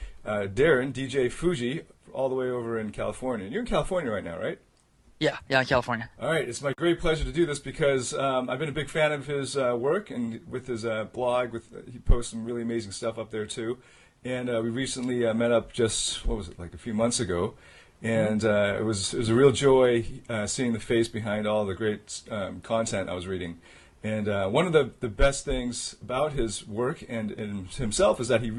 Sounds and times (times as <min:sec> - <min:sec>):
Speech: 0:00.3 - 0:04.6, 0:05.2 - 0:28.5.